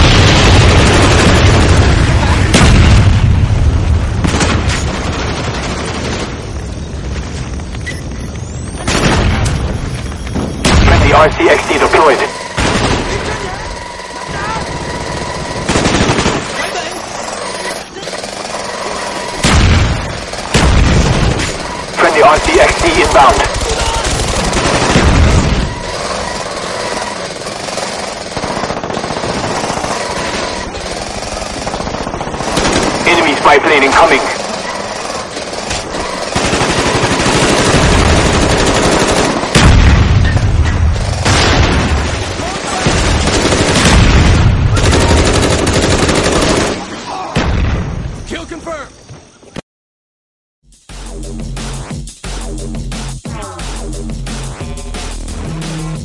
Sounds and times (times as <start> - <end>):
Speech: 10.8 - 12.4, 22.0 - 24.1, 33.0 - 34.4, 48.3 - 48.9.